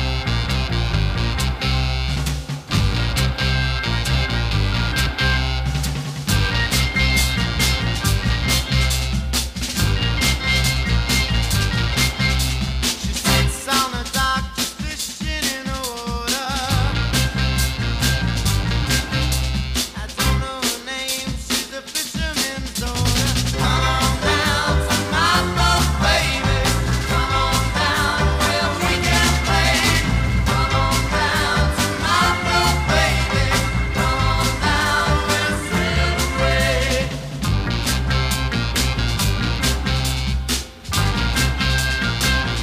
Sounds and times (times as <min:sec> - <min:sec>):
Music: 0:00.0 - 0:42.6.